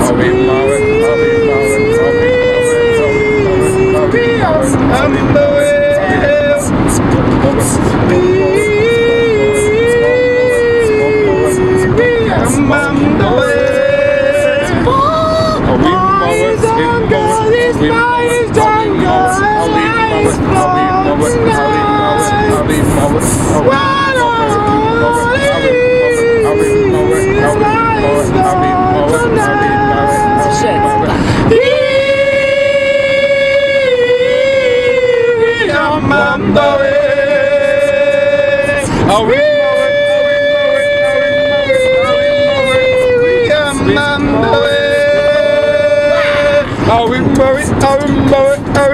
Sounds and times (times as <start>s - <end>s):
Vehicle: 0.0s - 48.9s.